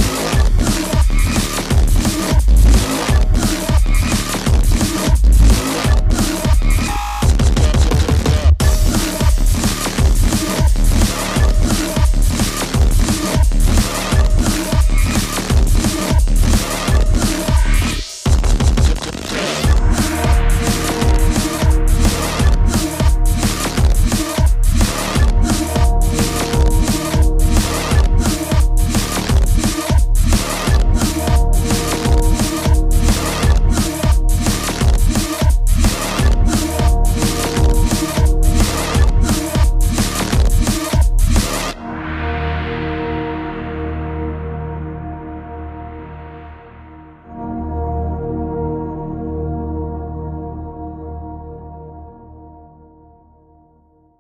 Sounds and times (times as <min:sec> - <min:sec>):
Drum and bass: 0:00.0 - 0:46.4.